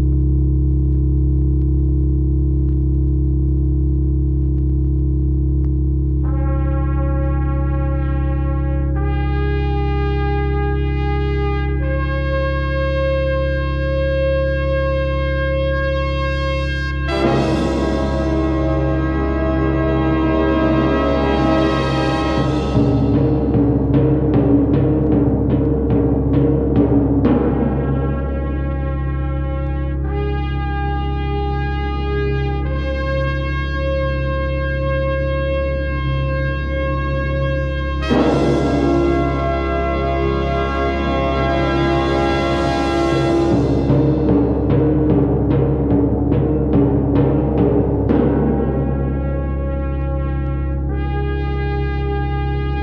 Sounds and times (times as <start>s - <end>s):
Music: 6.1s - 52.8s.